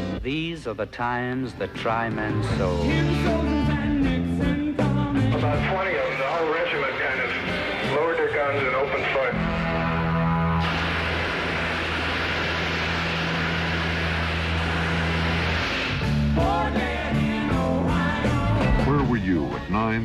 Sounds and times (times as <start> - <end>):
Rock and roll: 0.0 - 20.0.